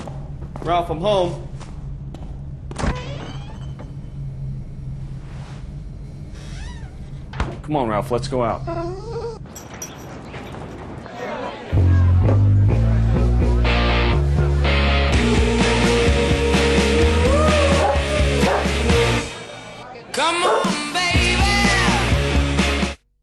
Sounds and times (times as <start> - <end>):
Music: 11.7 - 19.6, 20.2 - 23.1
Bow-wow: 17.7 - 18.7, 20.4 - 20.7.